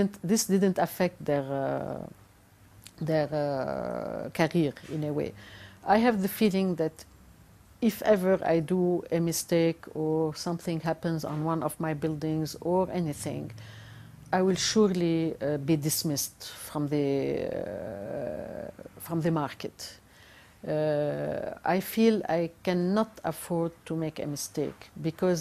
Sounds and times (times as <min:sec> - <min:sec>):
Speech: 0:00.0 - 0:02.2, 0:02.9 - 0:07.0, 0:07.8 - 0:13.5, 0:14.4 - 0:20.0, 0:20.6 - 0:25.4.